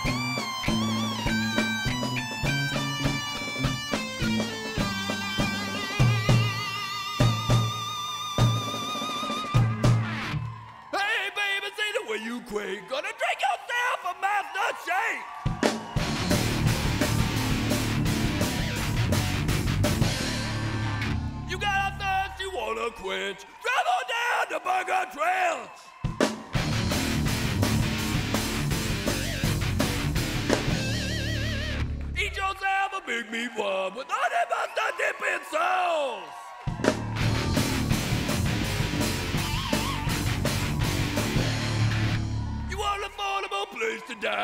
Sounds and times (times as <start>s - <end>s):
Music: 0.0s - 10.8s, 15.5s - 22.5s, 26.1s - 32.3s, 36.7s - 43.1s.